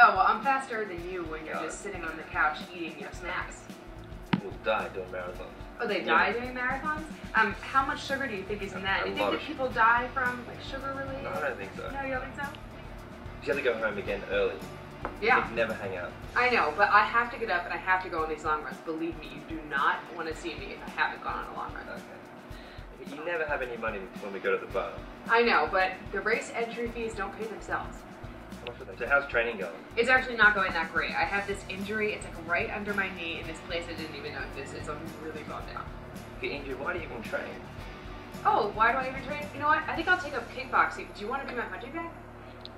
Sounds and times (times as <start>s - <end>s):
Music: 0.0s - 42.7s
Speech: 4.4s - 12.5s, 13.5s - 14.6s, 15.2s - 22.2s, 23.0s - 27.9s, 28.7s - 35.8s, 38.5s - 42.1s.